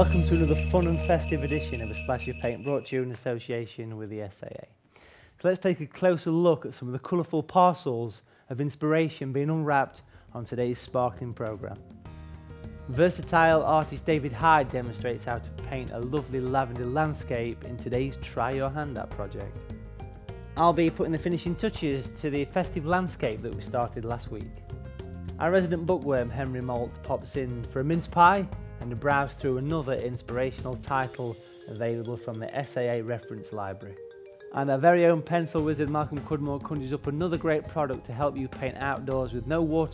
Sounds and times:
Music: 0.0s - 3.2s, 9.7s - 39.9s
Speech: 0.0s - 4.8s, 5.4s - 11.8s, 12.9s - 19.6s, 20.6s - 24.5s, 25.4s - 34.0s, 34.6s - 39.9s.

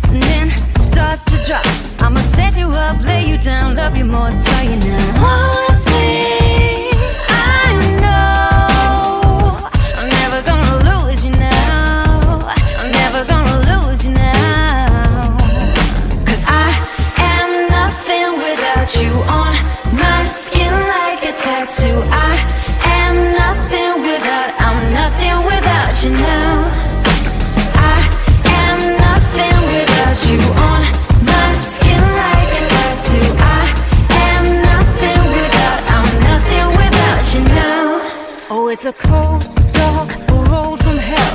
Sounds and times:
Music: 0.0s - 41.3s.

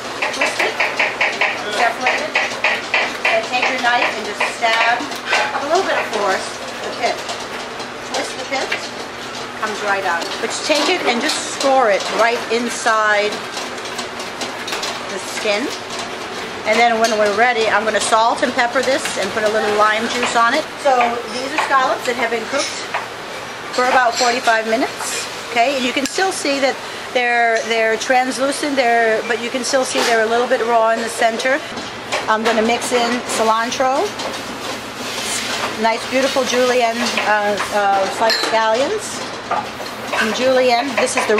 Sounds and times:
Speech: 1.6s - 2.4s, 3.3s - 7.2s, 8.1s - 8.8s, 9.6s - 13.4s, 15.1s - 15.8s, 16.7s - 22.9s, 23.8s - 31.7s, 32.3s - 34.2s, 35.8s - 39.3s, 40.2s - 41.4s.

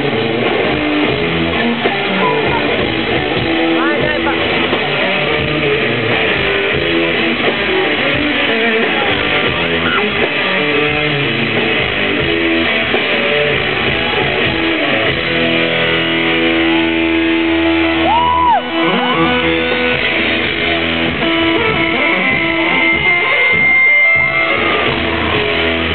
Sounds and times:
Music: 0.0s - 25.9s.

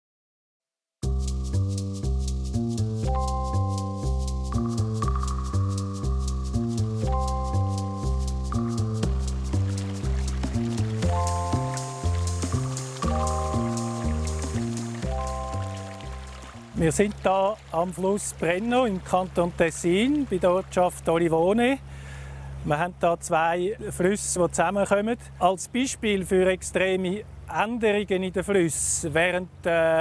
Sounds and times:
Music: 1.0s - 17.4s
Stream: 8.5s - 30.0s
Trickle, dribble: 9.0s - 21.3s
Speech: 16.8s - 21.8s, 22.7s - 30.0s.

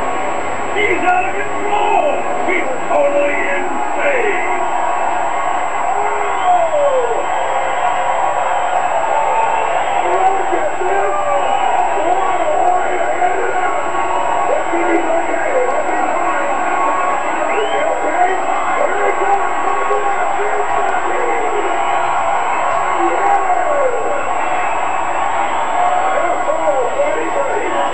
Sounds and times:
Speech: 0.8s - 4.6s, 10.0s - 21.8s, 23.0s - 24.2s, 26.1s - 27.9s.

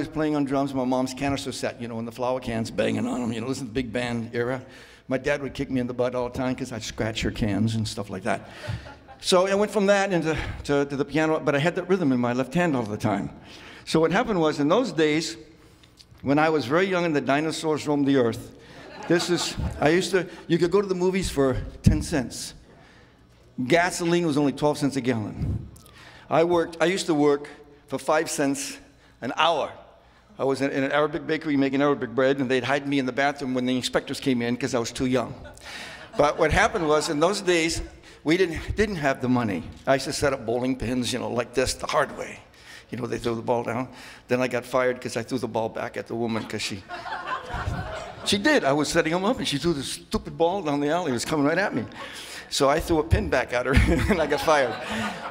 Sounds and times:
Speech: 0.0s - 8.4s, 9.2s - 15.4s, 16.2s - 22.6s, 23.6s - 25.5s, 26.3s - 29.8s, 30.4s - 35.4s, 36.2s - 46.8s, 48.2s - 54.8s.

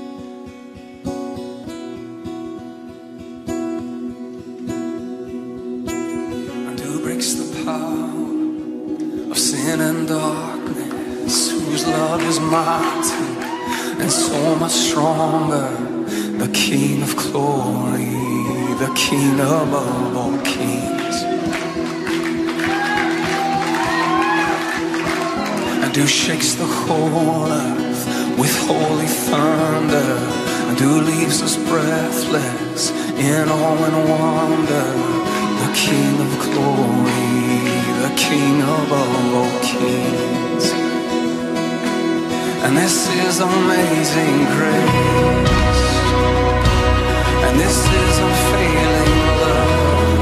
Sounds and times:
Music: 0.0s - 50.2s.

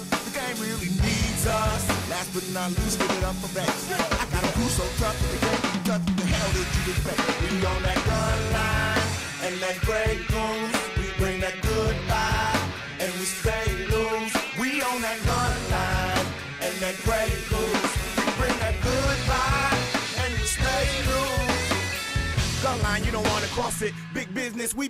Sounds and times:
Rhythm and blues: 0.0s - 24.8s.

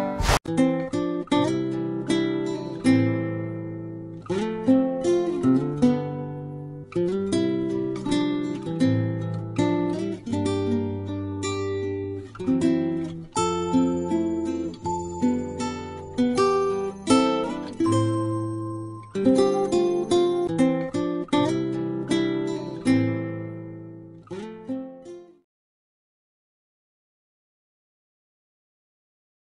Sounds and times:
Music: 0.0s - 25.5s.

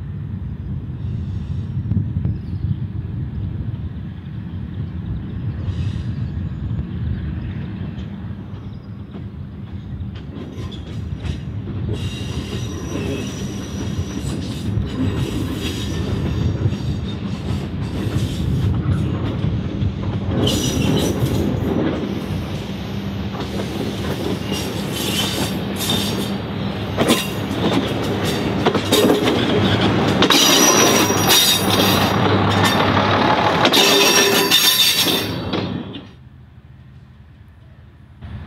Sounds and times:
Railroad car, train wagon: 0.0s - 38.4s
Train: 0.0s - 38.4s
Train wheels squealing: 5.5s - 19.1s, 20.4s - 33.0s, 33.7s - 36.2s
Clickety-clack: 8.0s - 22.1s, 27.0s - 35.8s.

